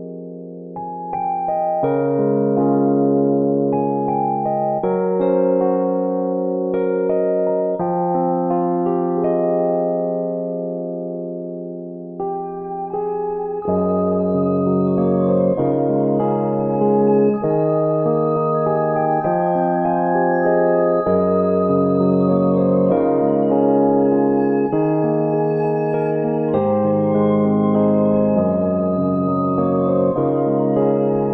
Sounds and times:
Music: 0:00.0 - 0:31.3.

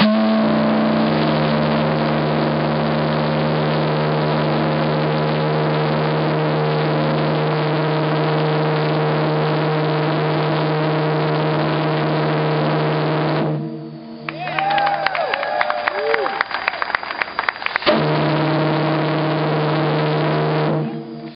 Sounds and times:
Steam whistle: 0:00.0 - 0:21.3.

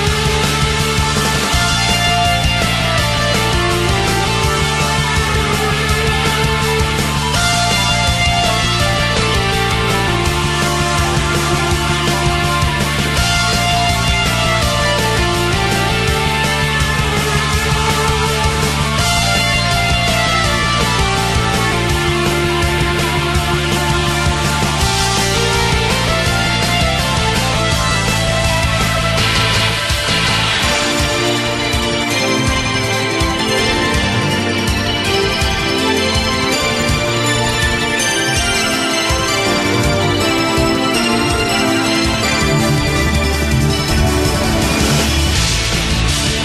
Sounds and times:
Music: 0:00.0 - 0:46.4.

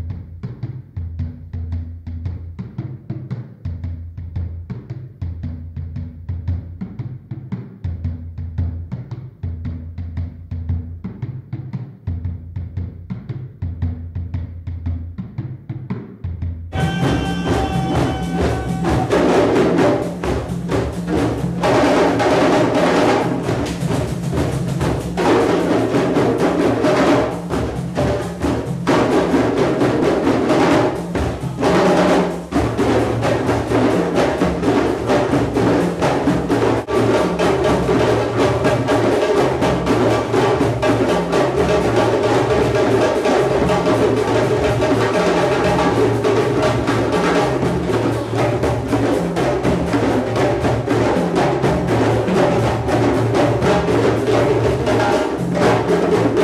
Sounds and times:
Drum: 0:00.0 - 0:56.4.

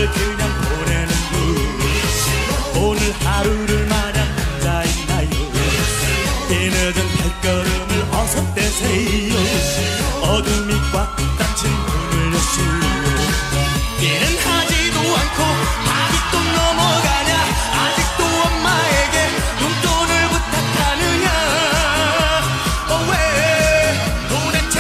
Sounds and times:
Music of Asia: 0:00.0 - 0:24.8.

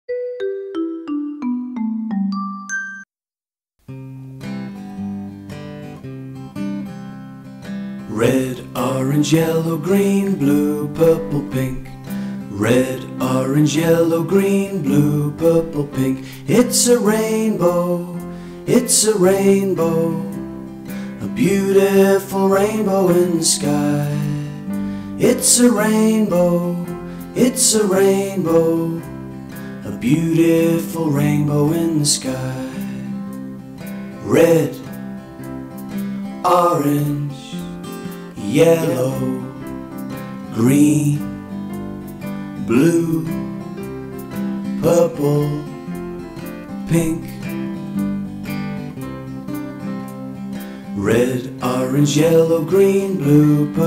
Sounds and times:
Music: 0:00.1 - 0:03.1, 0:03.8 - 0:53.8.

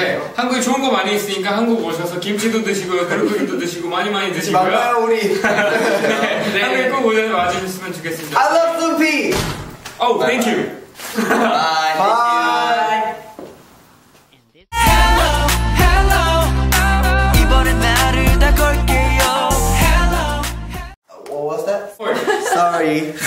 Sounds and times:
Speech: 0:00.0 - 0:05.4, 0:06.2 - 0:09.4, 0:10.0 - 0:10.8, 0:21.1 - 0:23.2
Music: 0:14.7 - 0:21.0.

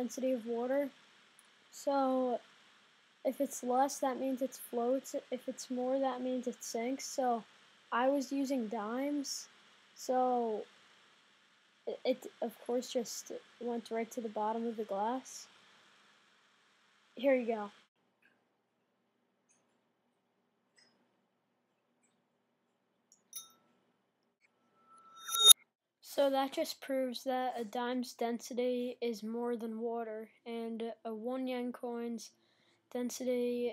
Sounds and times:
Speech: 0:00.0 - 0:00.9, 0:01.8 - 0:02.4, 0:03.3 - 0:10.7, 0:11.9 - 0:15.5, 0:17.2 - 0:17.8, 0:26.1 - 0:32.3, 0:32.9 - 0:33.7.

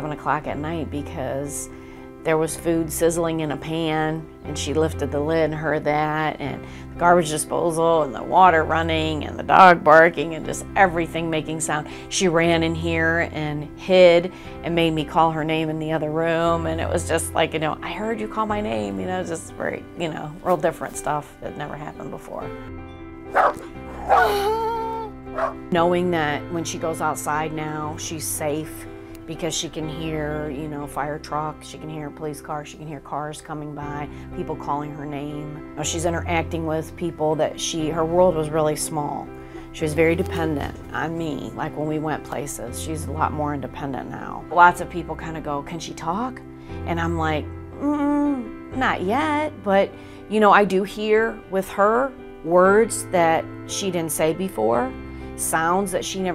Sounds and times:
Speech: 0:00.0 - 0:22.5, 0:25.7 - 0:56.3
Music: 0:00.0 - 0:56.3.

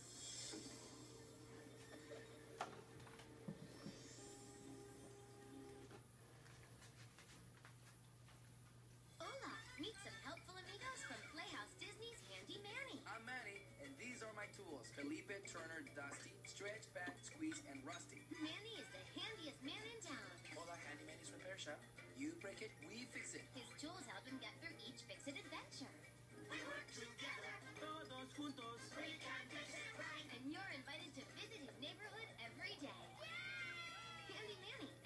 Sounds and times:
Music: 0:00.0 - 0:06.4, 0:09.1 - 0:35.0
Speech: 0:09.2 - 0:26.0, 0:29.8 - 0:33.1.

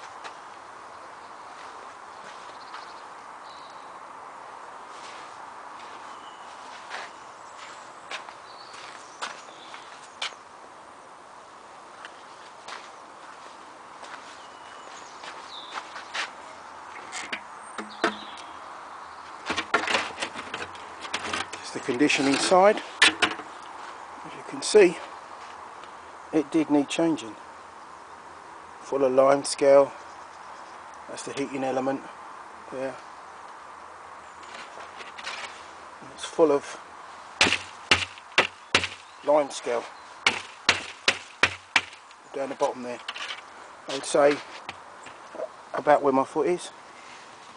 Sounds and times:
Speech: 0:21.6 - 0:22.9, 0:24.2 - 0:25.1, 0:26.3 - 0:27.4, 0:28.8 - 0:30.0, 0:31.1 - 0:32.1, 0:32.7 - 0:33.0, 0:36.0 - 0:36.8, 0:39.2 - 0:39.9, 0:42.3 - 0:43.0, 0:43.9 - 0:44.5, 0:45.3 - 0:46.8.

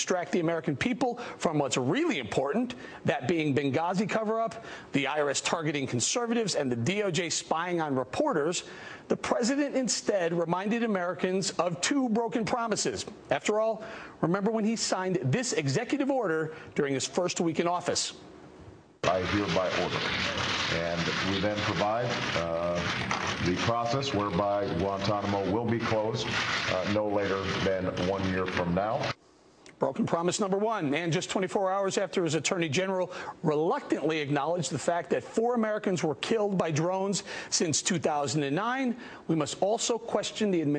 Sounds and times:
Male speech, man speaking: 0:00.0 - 0:18.2, 0:19.0 - 0:29.2, 0:29.8 - 0:40.7
Narration, monologue: 0:00.0 - 0:40.7.

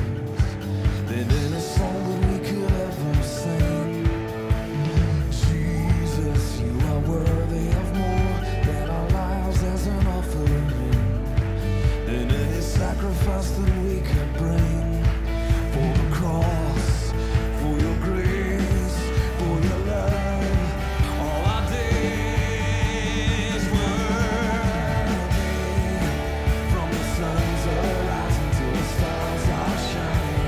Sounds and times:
Music: 0:00.0 - 0:30.4.

